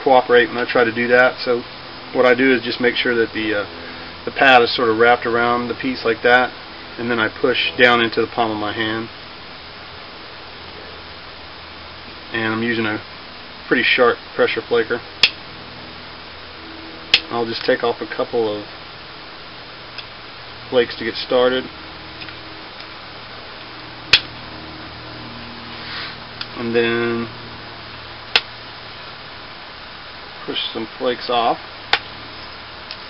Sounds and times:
Speech: 0.0 - 3.7, 4.3 - 9.1, 12.3 - 13.0, 13.7 - 15.0, 17.3 - 18.7, 20.7 - 21.7, 26.5 - 27.3, 30.4 - 31.6.

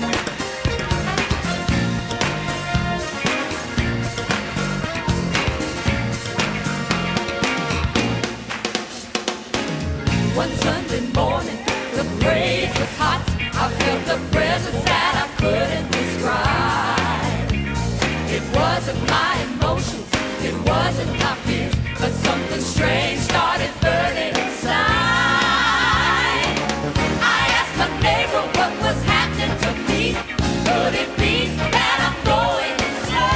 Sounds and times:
Music: 0.0 - 33.3.

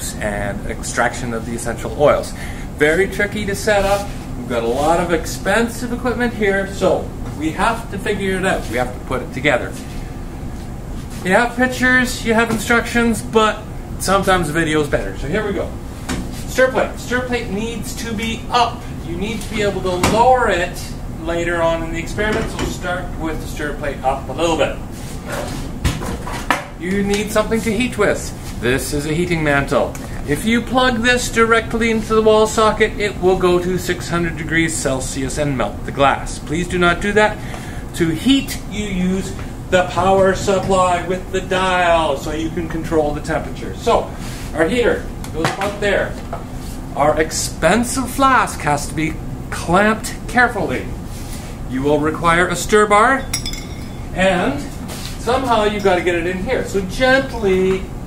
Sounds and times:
Speech: 0.0 - 9.8, 11.2 - 15.8, 16.5 - 25.4, 26.8 - 37.4, 38.0 - 46.2, 46.9 - 51.0, 51.7 - 53.3, 54.2 - 57.9.

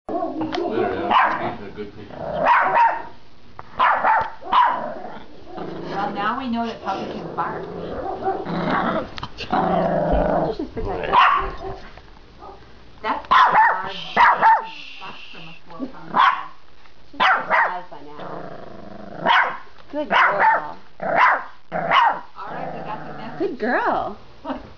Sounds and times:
Yip: 0.1 - 1.4, 2.4 - 3.1, 3.8 - 4.8, 11.1 - 11.8, 13.3 - 14.7, 16.2 - 16.6, 17.2 - 17.8, 19.2 - 22.3
Bark: 0.1 - 1.6, 2.4 - 3.2, 3.8 - 4.8, 8.0 - 8.5, 11.1 - 12.6, 13.3 - 14.7, 16.1 - 16.6, 17.2 - 17.9, 19.2 - 22.3.

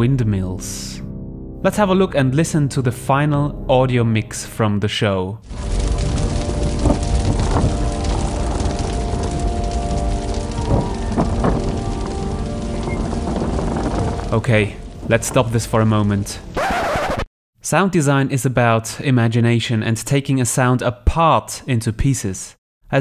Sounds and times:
Speech: 0.0 - 5.4, 14.3 - 16.4, 17.6 - 23.0
Music: 0.0 - 16.6
Sound effect: 16.5 - 17.3.

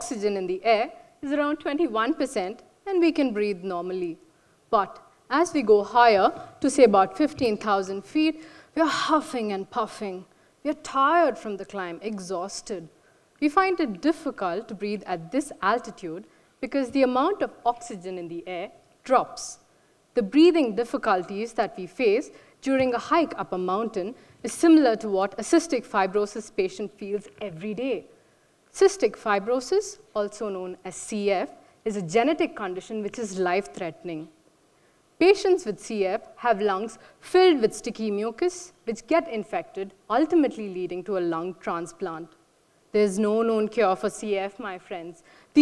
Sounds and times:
Speech: 0.0 - 4.2, 4.8 - 19.6, 20.2 - 28.1, 28.8 - 34.3, 35.2 - 42.4, 43.0 - 45.6.

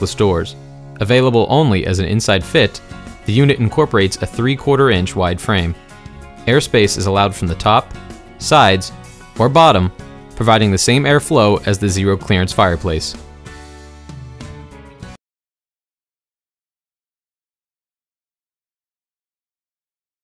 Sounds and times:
Speech: 0.0 - 5.8, 6.5 - 13.2
Music: 0.0 - 15.2.

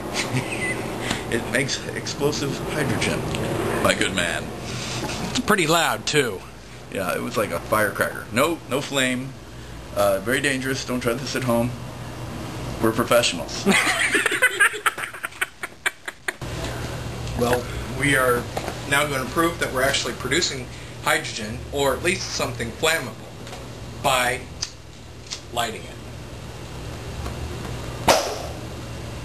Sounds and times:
Speech: 1.3 - 4.5, 5.3 - 9.4, 10.0 - 11.8, 12.8 - 13.7, 17.4 - 23.2, 24.0 - 24.5, 25.5 - 26.0.

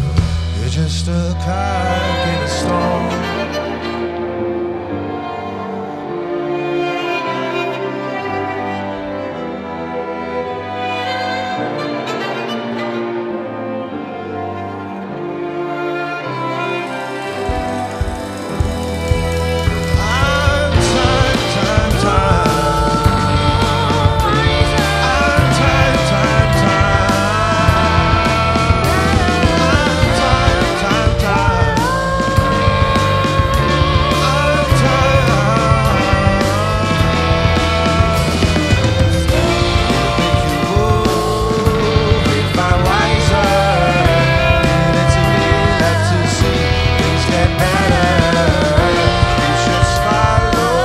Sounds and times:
Orchestra: 0.0 - 50.8.

